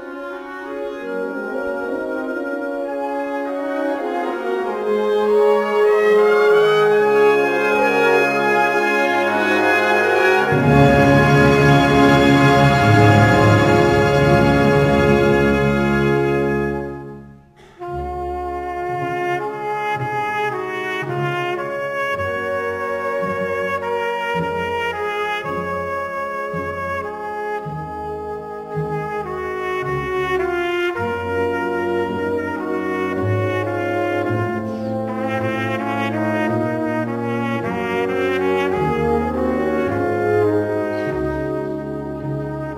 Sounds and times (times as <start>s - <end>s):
Trumpet: 0.0s - 42.7s.